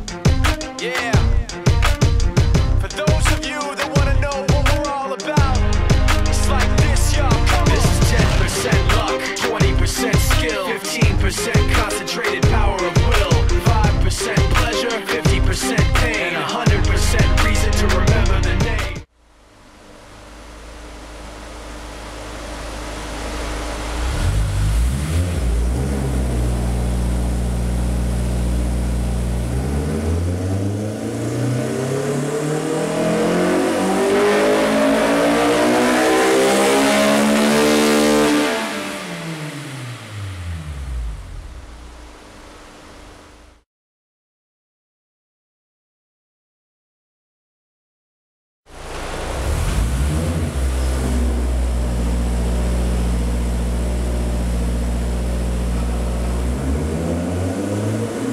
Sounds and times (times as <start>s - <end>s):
Medium engine (mid frequency): 4.0s - 11.9s, 16.7s - 43.6s, 48.7s - 58.3s
Car: 19.1s - 43.6s, 48.7s - 58.3s
Accelerating, revving, vroom: 23.8s - 27.5s, 29.0s - 41.1s, 48.9s - 53.3s, 55.8s - 58.3s.